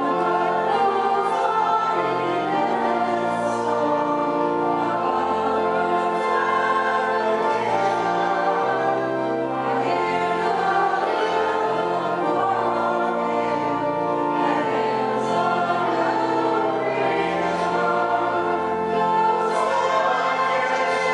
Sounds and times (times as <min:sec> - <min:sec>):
Choir: 0:00.0 - 0:21.1.